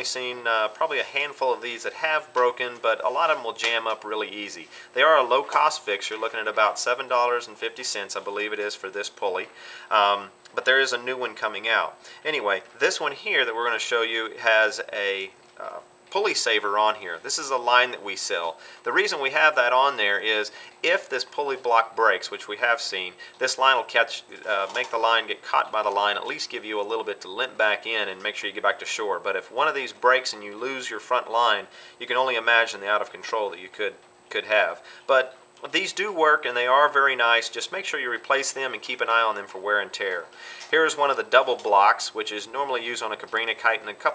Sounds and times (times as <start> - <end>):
Speech: 0.0 - 44.1.